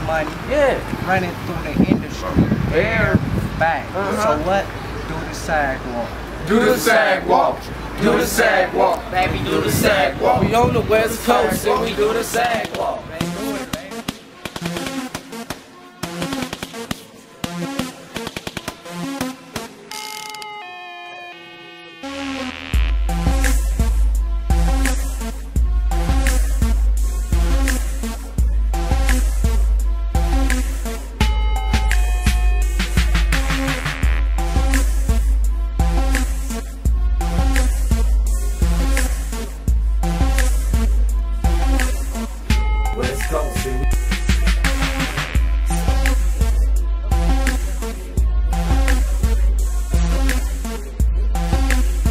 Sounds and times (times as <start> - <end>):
Music: 6.5 - 52.1.